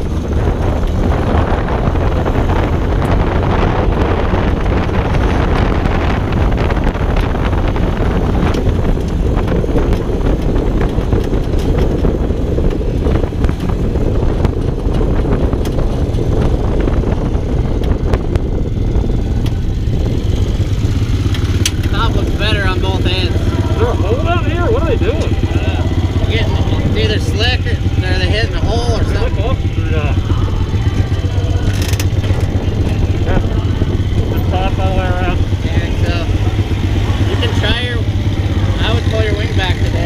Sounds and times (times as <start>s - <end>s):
Vehicle: 0.0s - 40.0s
Speech: 21.9s - 30.3s.